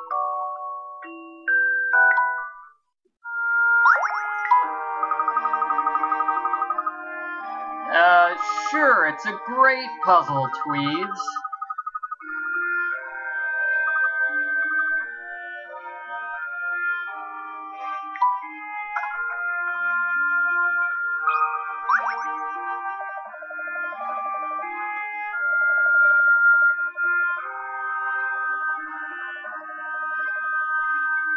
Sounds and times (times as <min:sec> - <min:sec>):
Music: 0:00.0 - 0:31.3
Speech: 0:07.9 - 0:11.4.